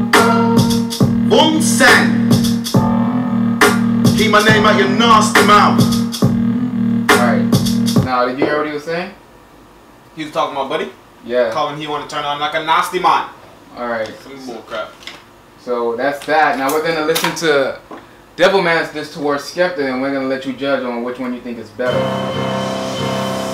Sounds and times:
Music: 0:00.0 - 0:08.1, 0:21.9 - 0:23.5
Speech: 0:01.3 - 0:02.2, 0:04.2 - 0:05.8, 0:07.1 - 0:09.2, 0:10.2 - 0:15.0, 0:15.6 - 0:22.0.

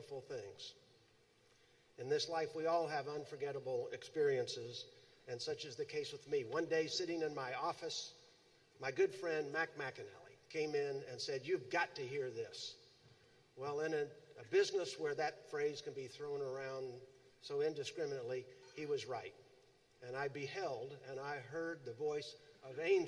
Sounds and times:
Speech: 0:00.0 - 0:00.8, 0:02.0 - 0:08.1, 0:08.8 - 0:12.8, 0:13.6 - 0:19.4, 0:20.0 - 0:23.0.

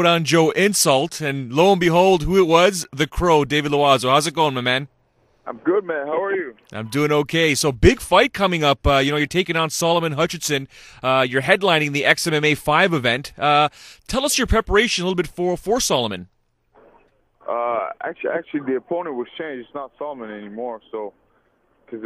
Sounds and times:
Speech: 0:00.0 - 0:04.9, 0:05.5 - 0:16.3, 0:17.4 - 0:21.2.

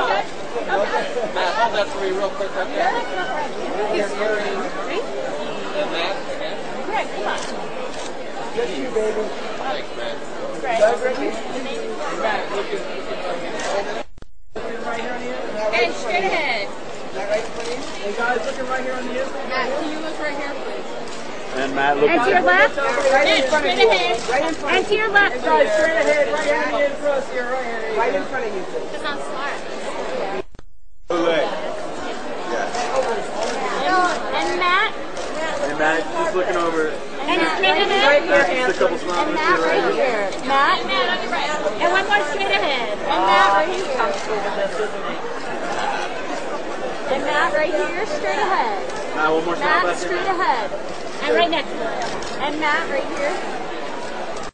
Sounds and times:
Chatter: 0:00.0 - 0:54.5.

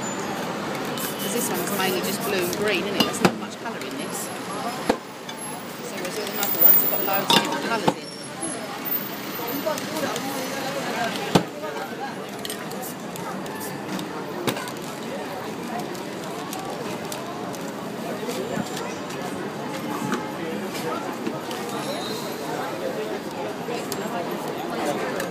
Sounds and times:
Speech: 0:01.2 - 0:04.9, 0:05.5 - 0:25.3.

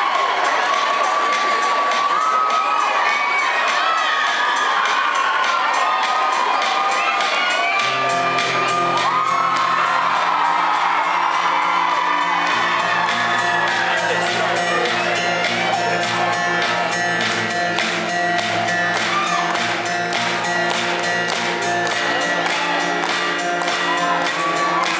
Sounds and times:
Music: 0:00.0 - 0:24.9.

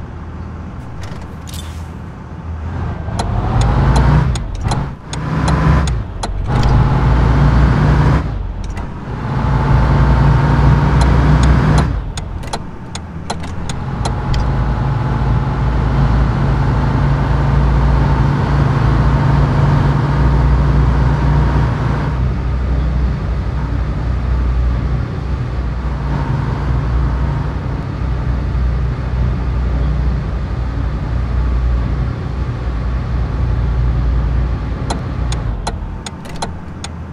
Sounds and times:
Motor vehicle (road): 0:00.0 - 0:37.1.

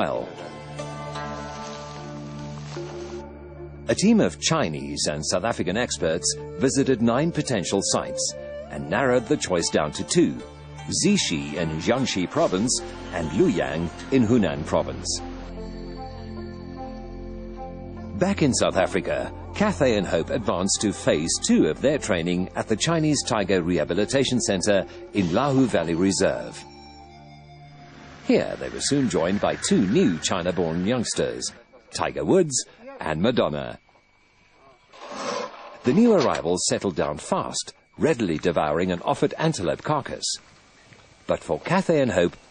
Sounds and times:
Music: 0:00.0 - 0:34.2
Speech: 0:03.9 - 0:15.2, 0:18.2 - 0:26.6, 0:28.3 - 0:33.8, 0:35.9 - 0:40.4, 0:41.3 - 0:42.4.

